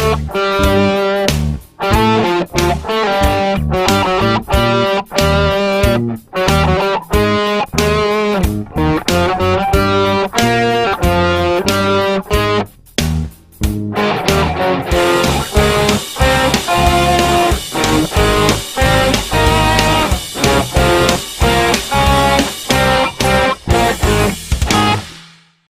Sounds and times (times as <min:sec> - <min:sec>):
Guitar: 0:00.0 - 0:25.2.